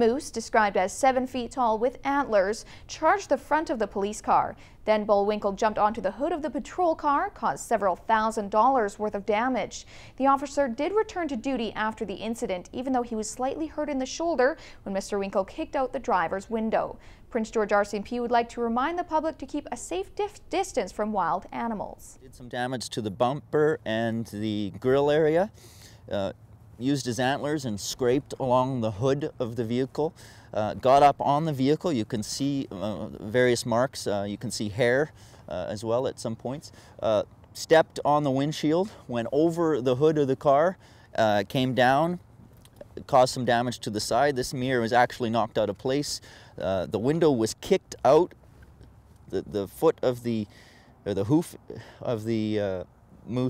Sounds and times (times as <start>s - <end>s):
Speech: 0.0s - 25.5s, 26.1s - 42.2s, 42.8s - 48.4s, 49.3s - 50.5s, 51.1s - 53.5s.